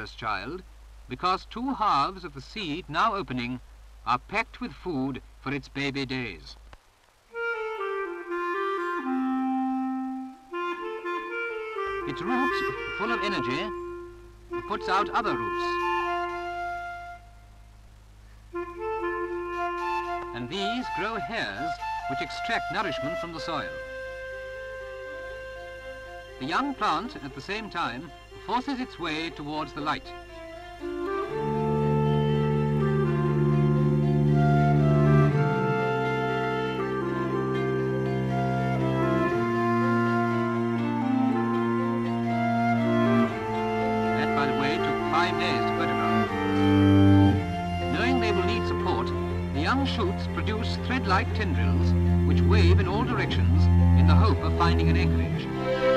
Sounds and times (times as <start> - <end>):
Speech: 0.0 - 6.6, 12.1 - 13.8, 14.7 - 15.8, 20.3 - 23.7, 26.4 - 30.2, 44.2 - 46.1, 47.9 - 55.4
Clarinet: 7.3 - 55.9.